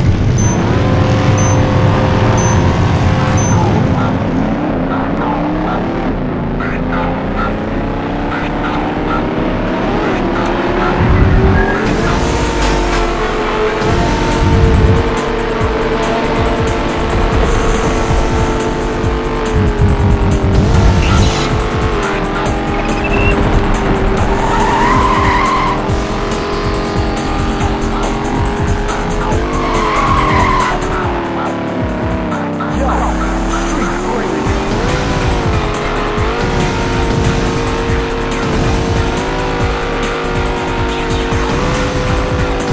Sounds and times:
Music: 0.0 - 42.7.

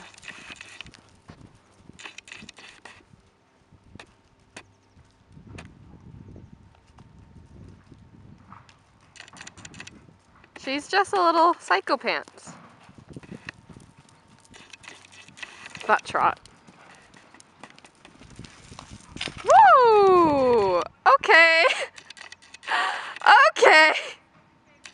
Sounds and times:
Horse: 0.0 - 3.4, 6.7 - 19.5
Outside, rural or natural: 0.0 - 24.9
Speech: 23.2 - 24.0.

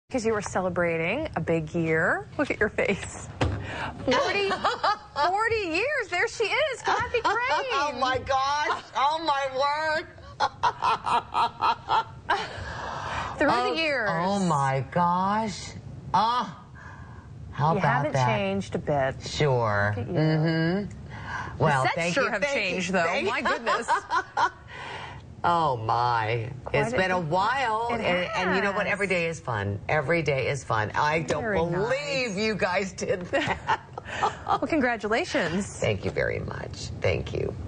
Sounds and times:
Female speech, woman speaking: 0.1 - 3.3, 4.0 - 10.2, 13.4 - 16.6, 17.6 - 20.2, 21.6 - 24.1, 25.4 - 33.4, 34.6 - 37.6.

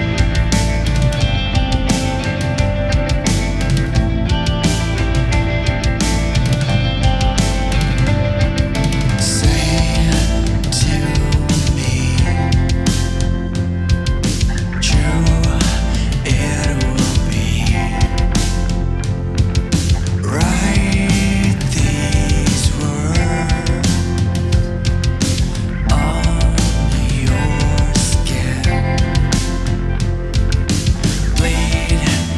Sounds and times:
Soundtrack music: 0.0 - 32.3.

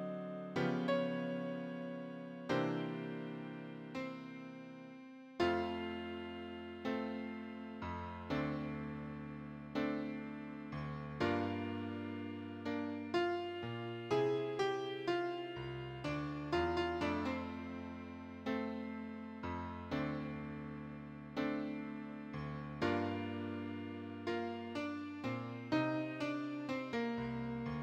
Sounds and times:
Tender music: 0.0 - 27.8.

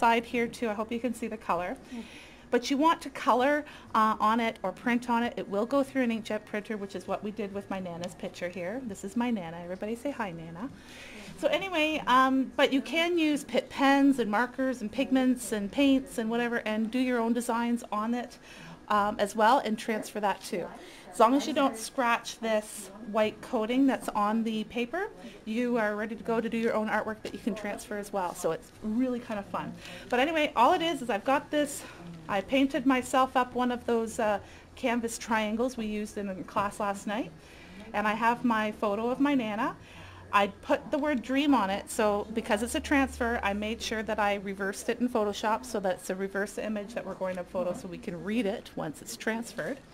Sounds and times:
Speech: 0.0 - 2.0, 2.6 - 49.9.

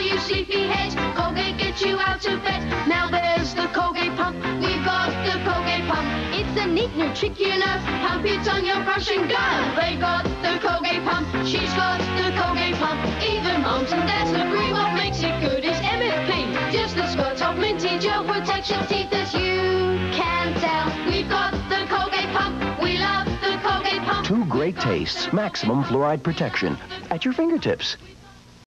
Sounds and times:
Music: 0.0 - 28.6
Speech: 24.2 - 28.1.

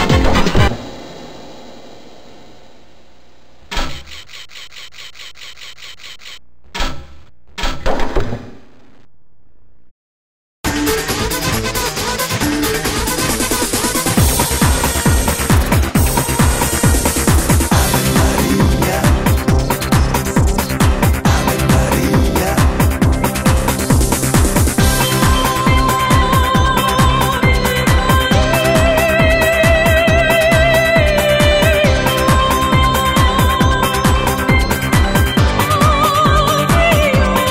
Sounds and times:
Music: 0.0 - 0.8, 10.7 - 37.5.

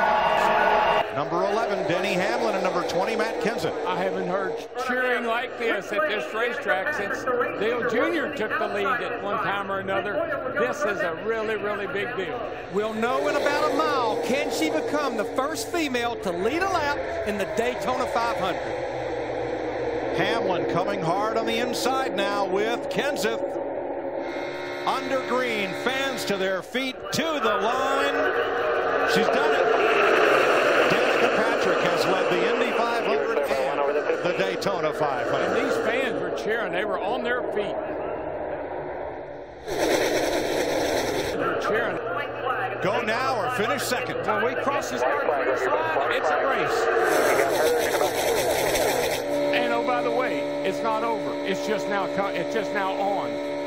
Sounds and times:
Speech: 1.2 - 18.6, 20.1 - 23.5, 24.9 - 28.4, 29.0 - 30.0, 30.8 - 37.8, 41.4 - 48.6, 49.5 - 53.3.

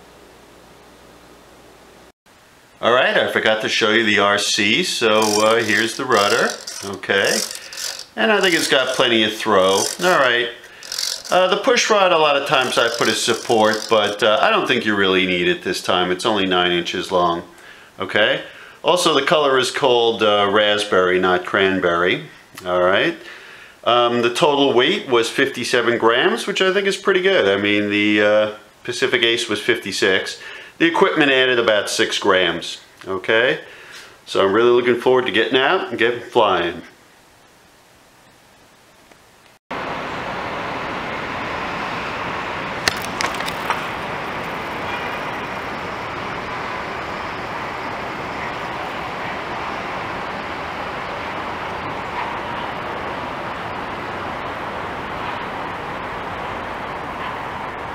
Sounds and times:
Inside, small room: 0.0 - 39.6
Speech: 2.8 - 7.6, 8.2 - 10.6, 11.3 - 33.7, 34.3 - 37.0.

